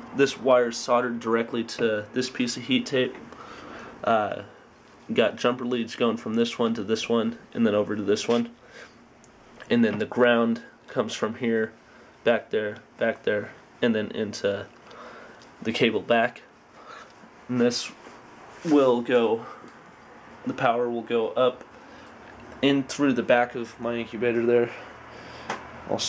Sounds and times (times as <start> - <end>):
Speech: 0.2 - 3.2, 4.0 - 8.6, 9.6 - 14.7, 15.6 - 16.5, 17.5 - 18.0, 18.6 - 19.6, 20.4 - 21.6, 22.6 - 24.8, 25.9 - 26.0.